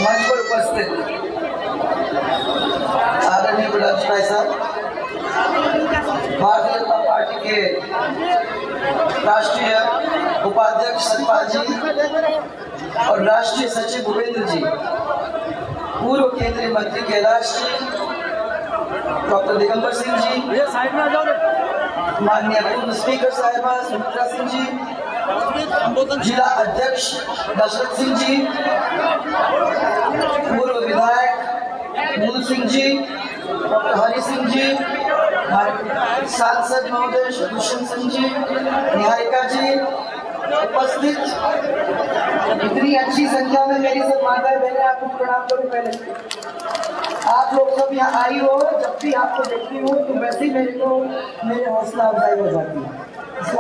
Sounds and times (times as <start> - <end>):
Narration, monologue: 9.1 - 15.0, 16.0 - 18.2, 22.2 - 25.0, 25.6 - 28.9, 30.4 - 41.8, 42.6 - 46.3, 47.1 - 53.6.